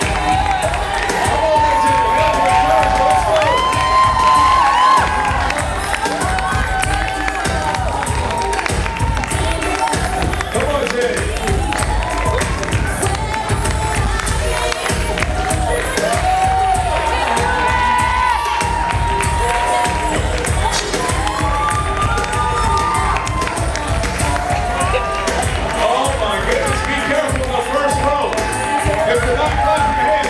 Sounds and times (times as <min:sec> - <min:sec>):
Music: 0:00.0 - 0:30.2.